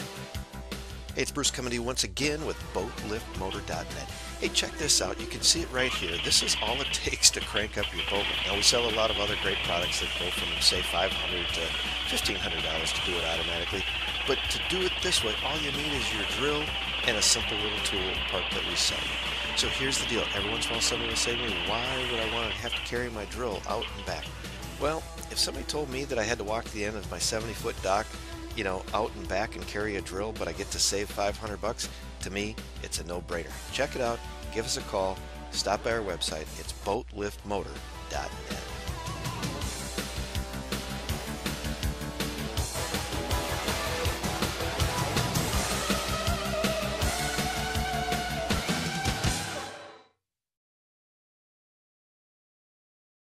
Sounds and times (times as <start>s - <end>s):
Music: 0.0s - 50.2s
Speech: 1.2s - 38.7s.